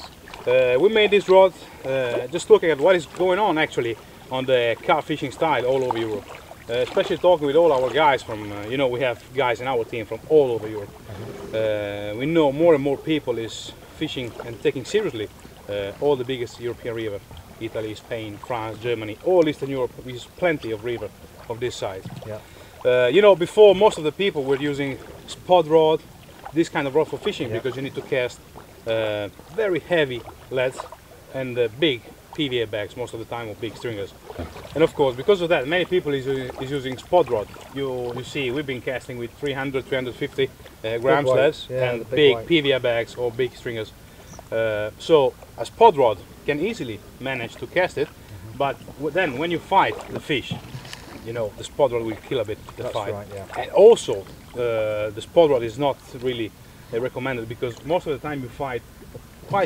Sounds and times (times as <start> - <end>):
Stream: 0.0 - 59.6
Speech: 0.5 - 10.9, 11.6 - 26.0, 26.6 - 34.1, 34.8 - 43.9, 44.6 - 50.6, 51.3 - 58.8.